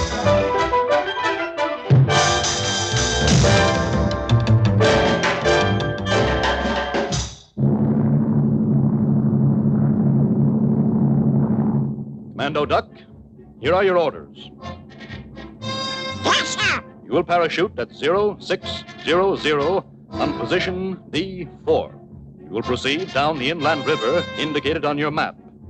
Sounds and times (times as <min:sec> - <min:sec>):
Music: 0:00.0 - 0:07.6, 0:12.4 - 0:25.7
Speech: 0:12.4 - 0:14.5, 0:16.2 - 0:22.0, 0:22.6 - 0:25.4.